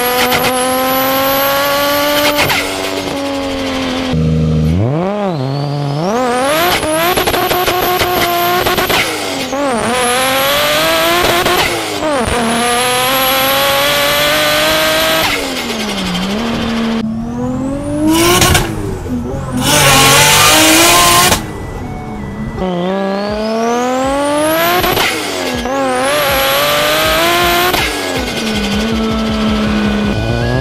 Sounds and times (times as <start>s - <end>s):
Race car, auto racing: 0.0s - 30.6s
Tire squeal: 4.9s - 10.4s, 19.6s - 26.0s, 27.8s - 30.6s.